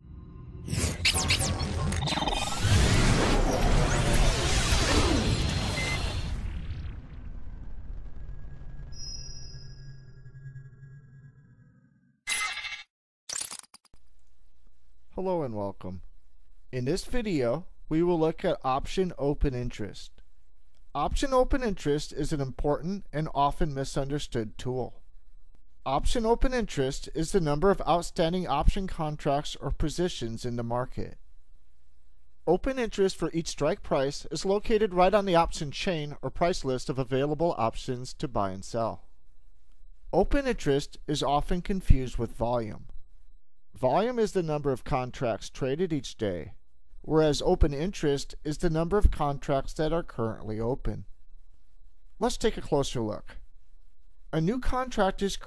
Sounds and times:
Speech: 15.2s - 16.0s, 16.7s - 20.2s, 21.0s - 25.0s, 25.9s - 31.2s, 32.5s - 39.1s, 40.2s - 42.9s, 43.8s - 51.1s, 52.2s - 53.4s, 54.3s - 55.4s.

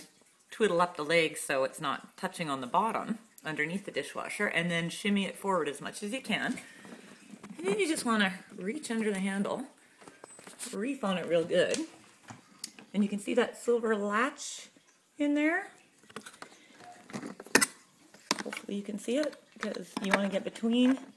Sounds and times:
Speech: 0.6s - 6.6s, 7.6s - 9.8s, 10.7s - 11.9s, 12.9s - 15.8s, 18.5s - 21.1s.

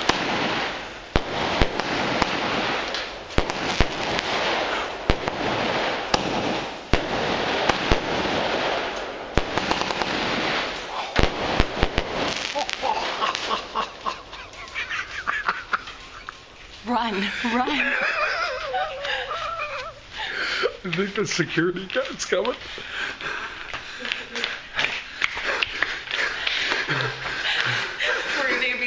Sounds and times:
Fireworks: 0.0s - 28.8s.

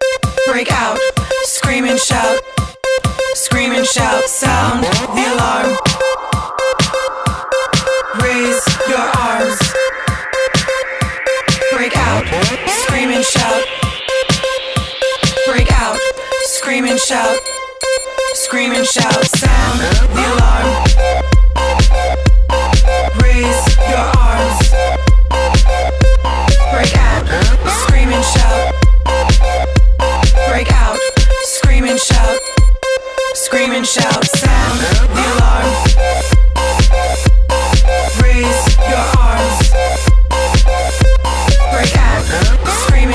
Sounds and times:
Music: 0.0s - 43.1s.

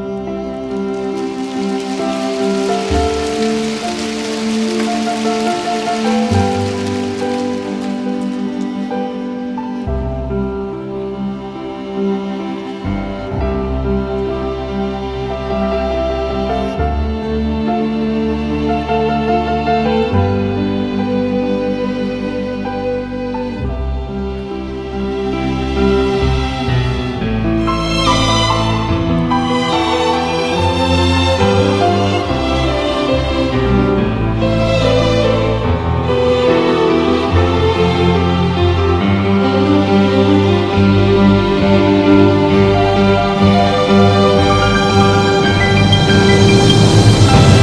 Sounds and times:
Music: 0.0s - 47.6s.

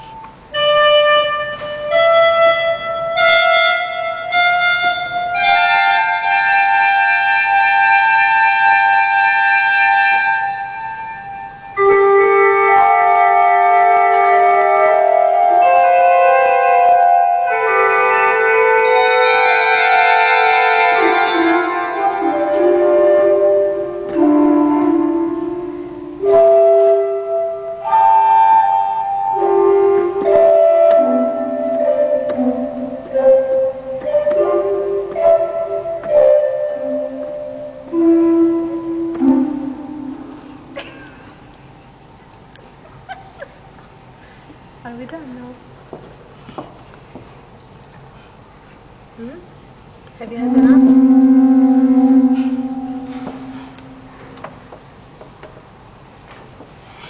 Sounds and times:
Piano: 0.0s - 44.2s, 50.2s - 57.1s
Inside, large room or hall: 0.0s - 57.1s.

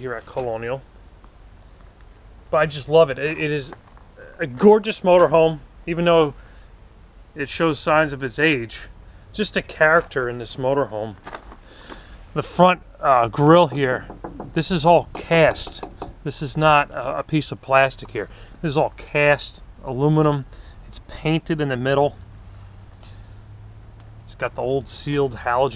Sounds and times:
Speech: 0.0s - 0.8s, 2.6s - 6.4s, 7.4s - 11.2s, 12.4s - 22.2s, 24.3s - 25.7s.

